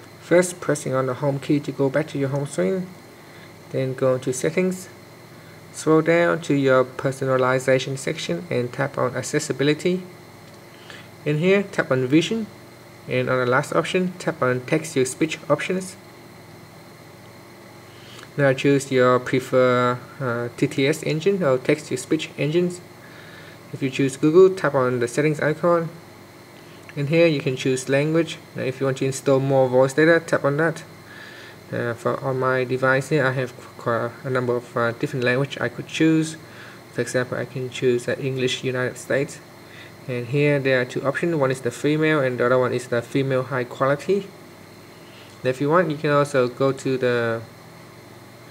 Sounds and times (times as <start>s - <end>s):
Speech: 0.2s - 3.0s, 3.7s - 5.0s, 5.7s - 10.1s, 11.2s - 16.0s, 18.3s - 22.9s, 23.7s - 26.0s, 26.9s - 31.0s, 31.7s - 44.4s, 45.4s - 47.5s.